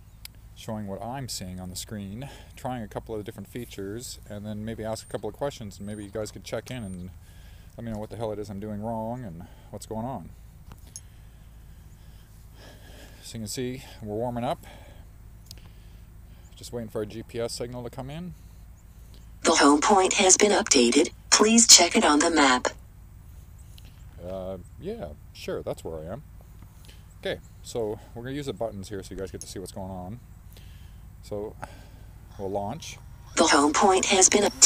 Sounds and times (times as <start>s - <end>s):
Speech: 0.6s - 7.1s, 7.8s - 10.3s, 13.3s - 14.6s, 16.6s - 18.3s, 19.4s - 22.8s, 24.2s - 26.2s, 27.2s - 30.2s, 32.4s - 34.6s.